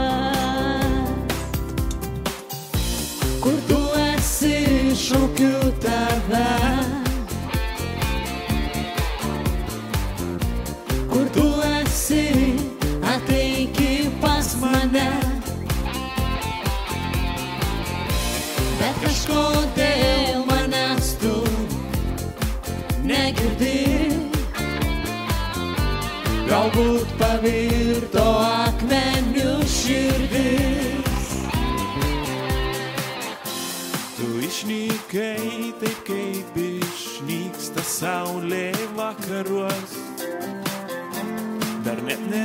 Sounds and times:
Music of Asia: 0.0s - 42.4s.

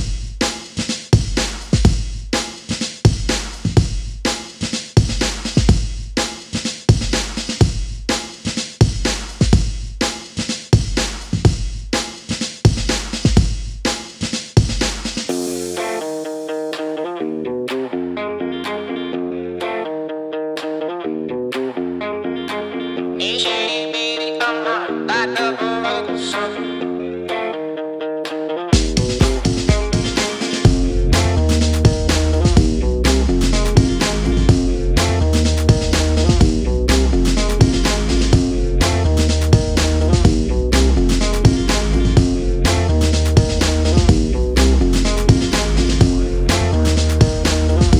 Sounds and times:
Music: 0.0s - 48.0s.

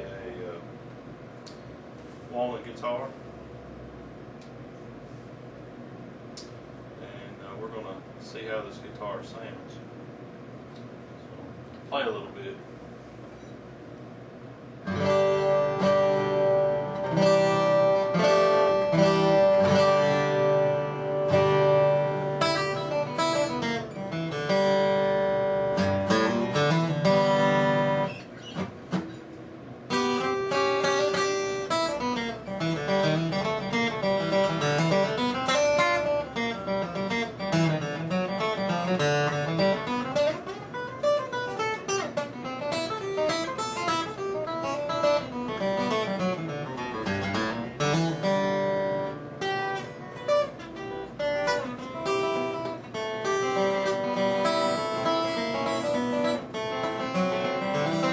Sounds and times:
Acoustic guitar: 14.8s - 58.1s
Strum: 14.8s - 58.1s.

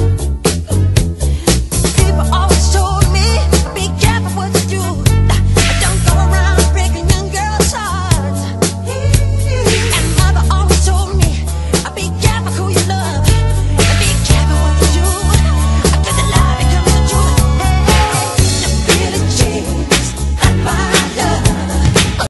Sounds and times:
Music: 0.0s - 22.2s.

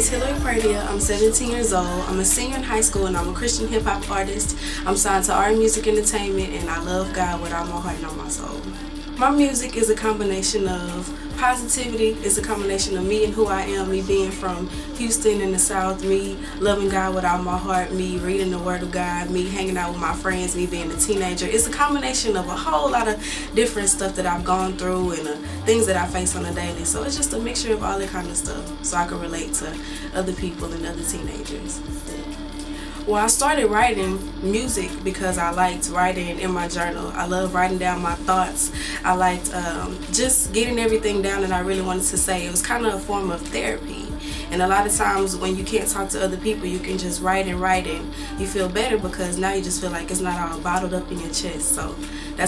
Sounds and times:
Speech: 0.0s - 32.4s, 33.0s - 52.4s
Music: 0.0s - 52.4s.

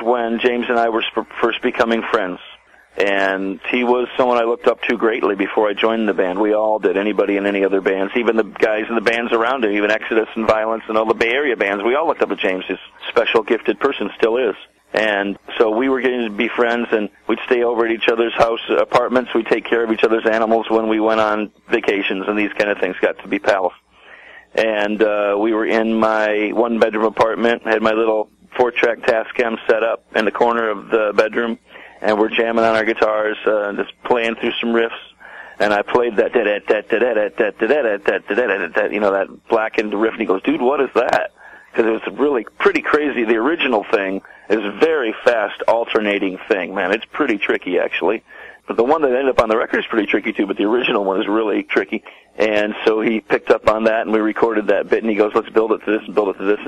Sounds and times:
Speech: 0.0s - 56.6s.

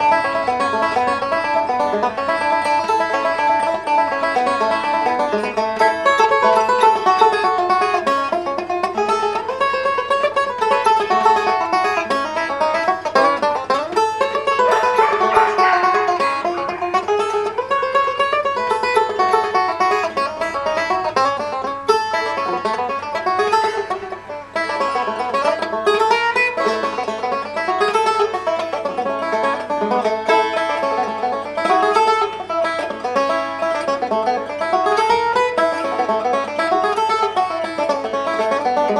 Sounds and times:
Banjo: 0.0s - 38.9s.

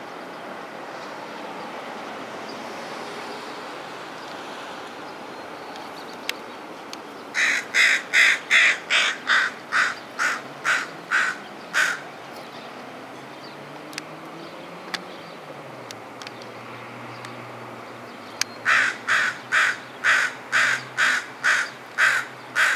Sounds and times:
Chirp, tweet: 12.3s - 13.6s, 14.4s - 15.5s, 18.0s - 18.6s.

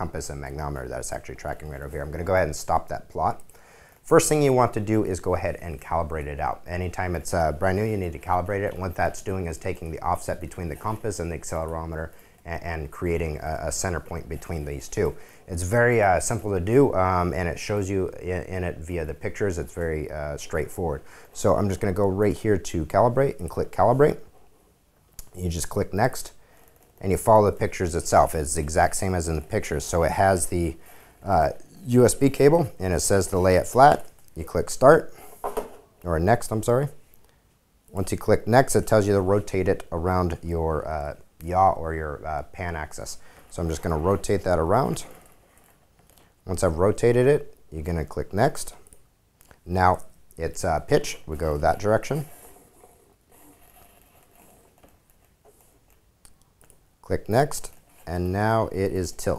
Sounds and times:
Speech: 0.0s - 24.3s, 25.2s - 26.4s, 27.0s - 35.2s, 36.0s - 37.0s, 37.9s - 45.2s, 46.4s - 48.9s, 49.6s - 52.4s, 57.0s - 59.3s.

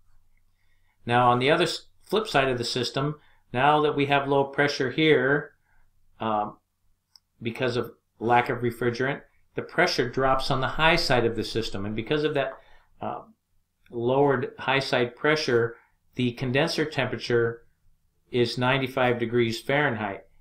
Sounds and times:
Speech: 1.0s - 5.6s, 6.2s - 6.6s, 7.4s - 17.6s, 18.3s - 20.3s.

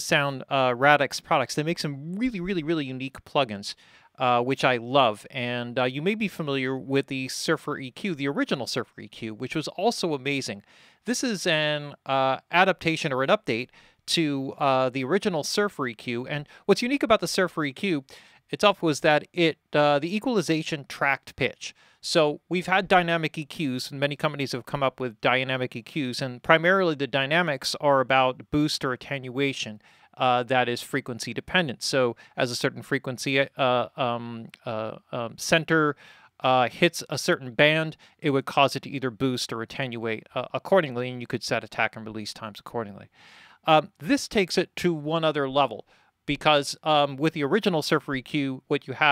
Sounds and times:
Speech: 0.0s - 49.1s.

